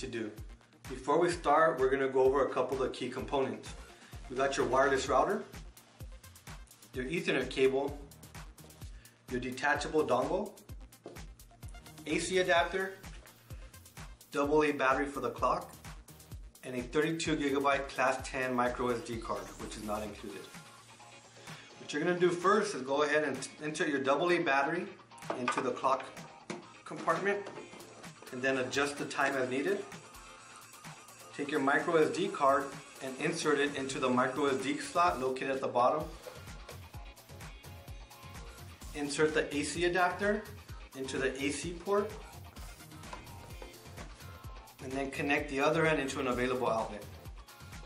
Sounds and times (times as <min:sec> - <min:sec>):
Speech: 0:00.0 - 0:03.7, 0:04.3 - 0:05.5, 0:07.0 - 0:08.0, 0:09.3 - 0:10.6, 0:12.0 - 0:13.0, 0:14.4 - 0:15.7, 0:16.6 - 0:20.5, 0:21.9 - 0:26.2, 0:26.8 - 0:27.6, 0:28.3 - 0:29.9, 0:31.4 - 0:36.2, 0:38.9 - 0:42.2, 0:44.8 - 0:47.1
Music: 0:00.0 - 0:47.8.